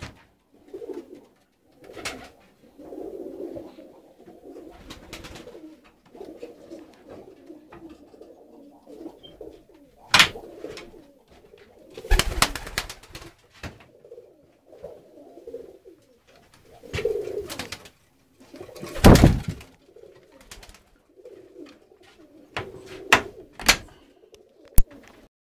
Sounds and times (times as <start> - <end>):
Coo: 0.0 - 25.3.